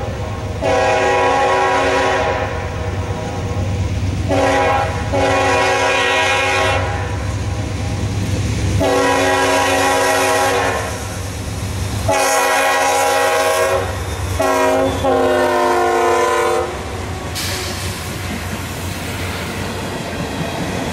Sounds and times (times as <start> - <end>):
Train horn: 0.0 - 3.4, 4.3 - 7.2, 8.8 - 11.2, 12.1 - 16.9
Railroad car, train wagon: 0.0 - 20.9
Clickety-clack: 17.3 - 20.9.